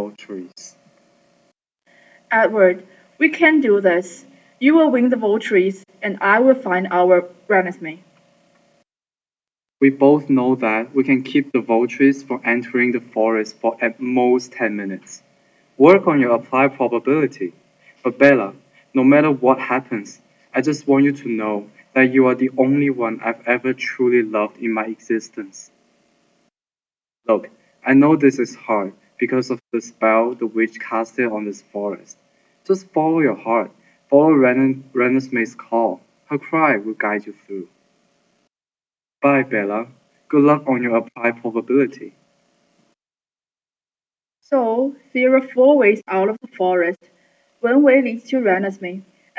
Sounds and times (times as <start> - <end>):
Speech: 0.0 - 0.8, 2.3 - 8.0, 9.8 - 15.2, 15.8 - 25.7, 27.3 - 37.7, 39.2 - 42.1, 44.6 - 47.0, 47.6 - 49.0.